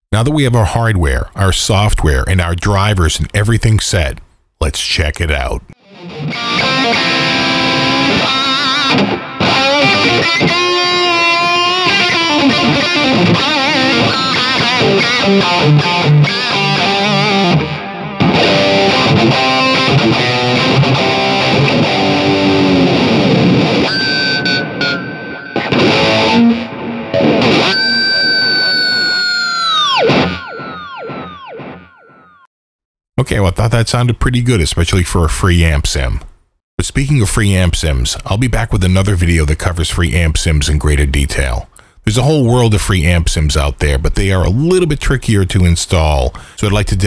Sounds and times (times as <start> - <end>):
Electric guitar: 5.8 - 32.3.